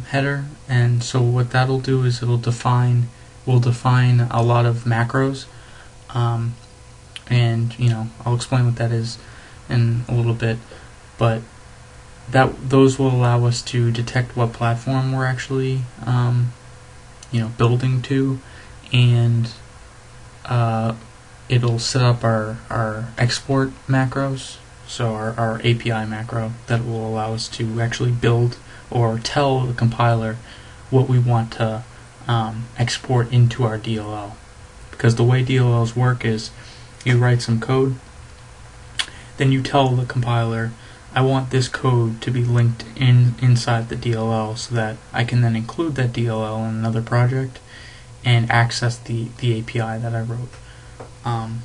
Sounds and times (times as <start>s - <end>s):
Speech: 0.0s - 5.5s, 6.1s - 11.5s, 12.3s - 16.6s, 17.2s - 19.7s, 20.4s - 38.0s, 39.0s - 50.6s, 51.2s - 51.6s.